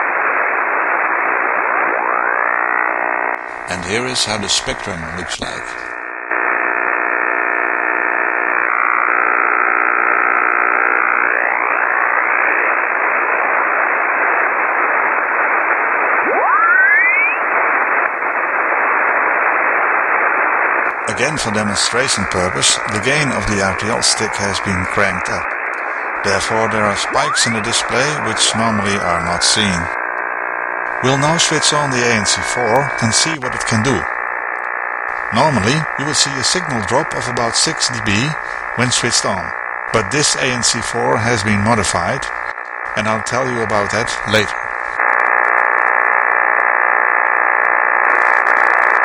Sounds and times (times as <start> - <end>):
Noise: 0.0 - 49.0
Radio: 0.0 - 49.0.